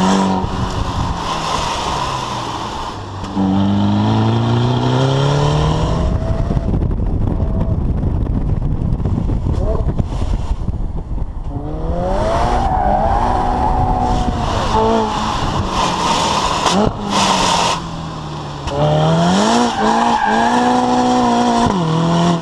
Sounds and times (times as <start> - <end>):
Accelerating, revving, vroom: 0.0 - 0.5, 1.2 - 6.6, 11.5 - 17.8, 18.7 - 22.4
Car: 0.0 - 22.4.